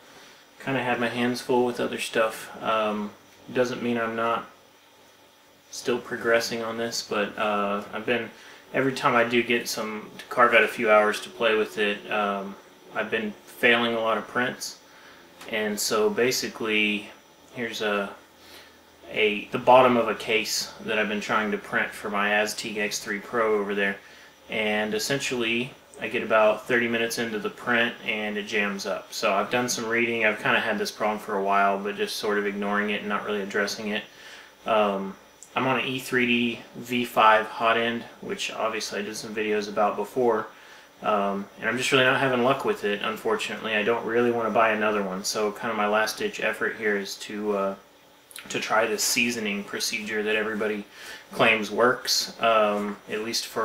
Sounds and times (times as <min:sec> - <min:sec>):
Speech: 0:00.6 - 0:04.6, 0:05.7 - 0:14.8, 0:15.4 - 0:18.3, 0:19.0 - 0:53.6.